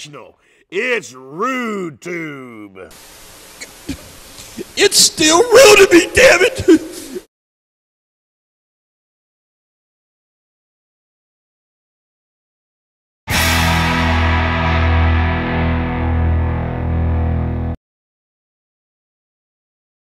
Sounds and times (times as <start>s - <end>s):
Music: 13.3s - 17.8s.